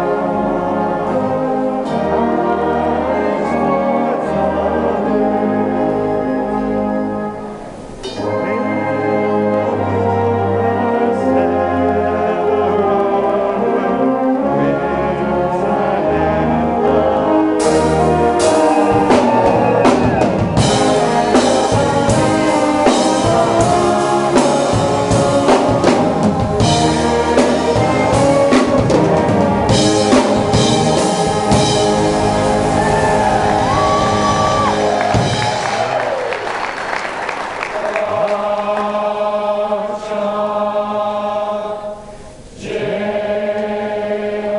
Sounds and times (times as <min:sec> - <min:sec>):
Music: 0:00.0 - 0:44.5.